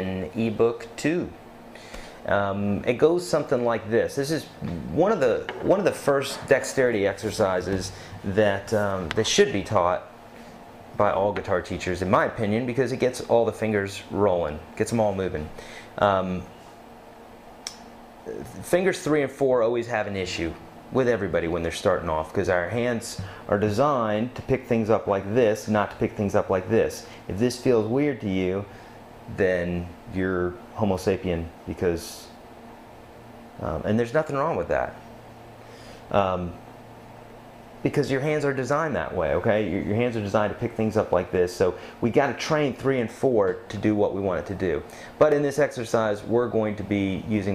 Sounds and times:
Speech: 0.0 - 1.4, 2.3 - 10.1, 11.0 - 16.5, 18.2 - 28.7, 29.3 - 32.4, 33.6 - 35.0, 36.1 - 36.6, 37.8 - 47.5.

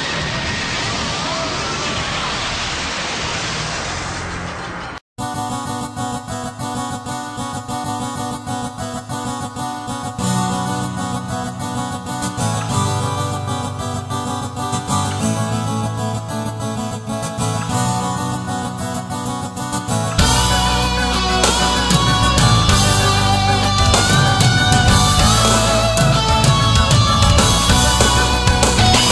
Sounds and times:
Music: 5.2 - 29.1.

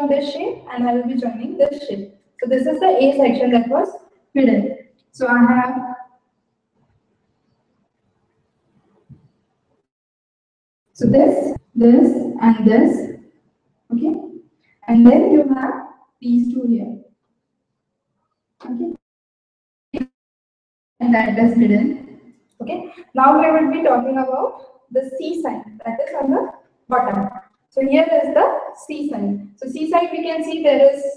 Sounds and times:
Speech: 0.0 - 5.9, 11.0 - 13.1, 13.9 - 14.2, 14.9 - 17.0, 18.6 - 19.0, 21.0 - 31.1.

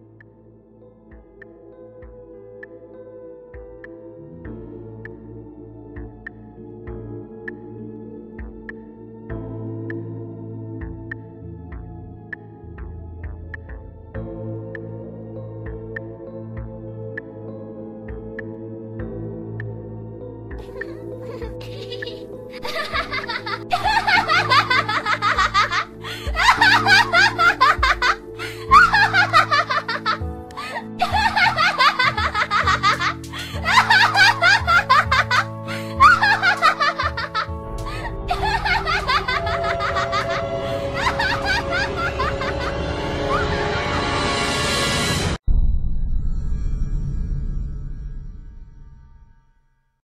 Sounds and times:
Music: 0.0 - 50.0
Snicker: 20.6 - 43.6.

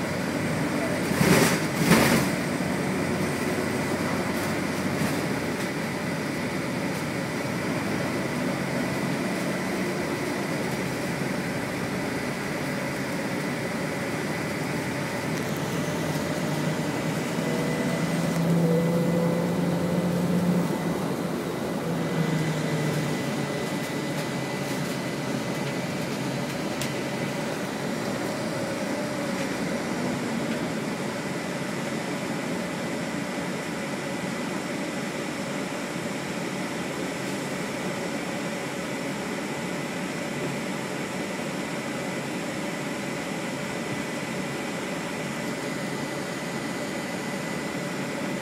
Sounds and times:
Bus: 0.0 - 48.4.

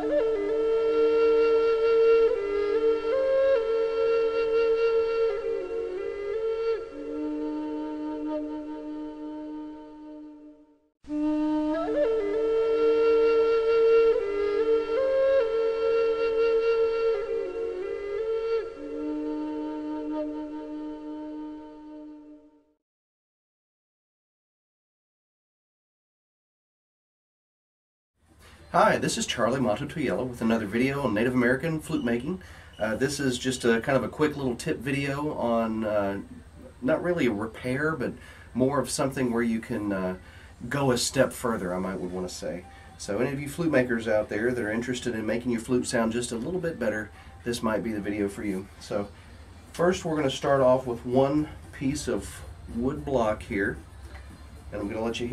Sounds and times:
Speech: 28.7 - 49.1, 49.7 - 53.8, 54.7 - 55.3.

